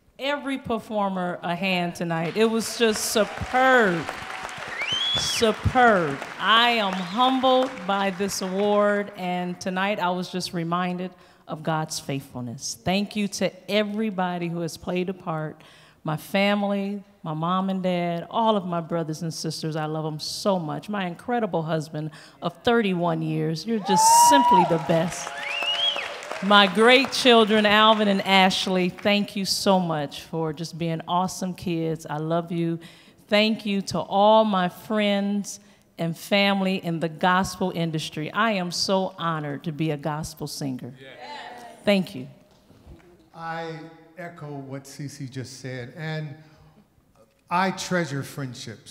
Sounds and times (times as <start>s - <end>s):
Narration, monologue: 0.0s - 4.3s, 5.2s - 25.4s, 26.2s - 48.9s
Female speech, woman speaking: 0.2s - 4.1s, 5.3s - 25.3s, 26.4s - 42.4s.